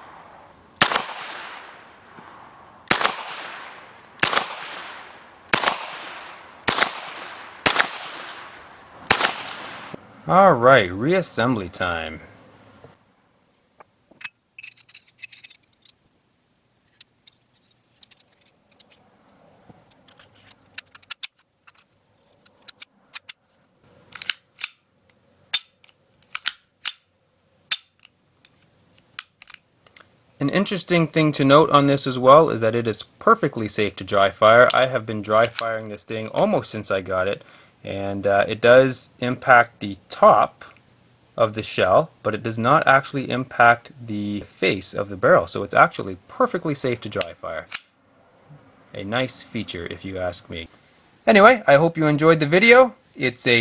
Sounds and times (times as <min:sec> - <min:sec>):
Outside, rural or natural: 0:00.0 - 0:53.6
Speech: 0:10.3 - 0:12.3, 0:30.4 - 0:40.8, 0:41.4 - 0:47.7, 0:49.0 - 0:50.7, 0:51.3 - 0:53.6.